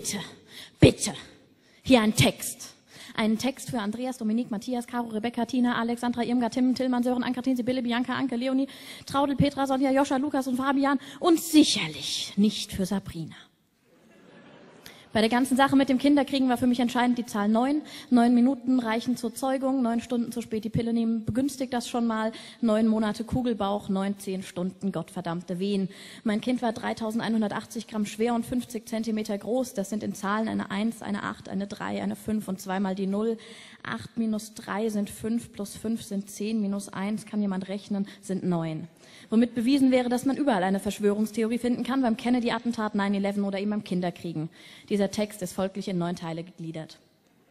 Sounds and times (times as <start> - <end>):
Speech: 0.0 - 1.3, 1.9 - 13.5, 15.1 - 47.0.